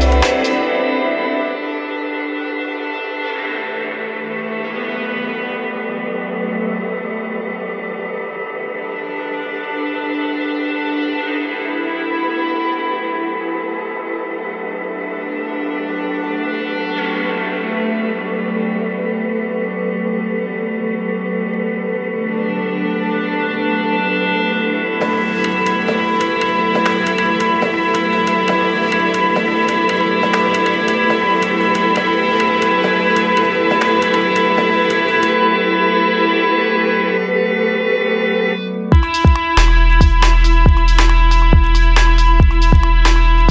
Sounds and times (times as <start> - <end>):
Music: 0.0 - 43.5.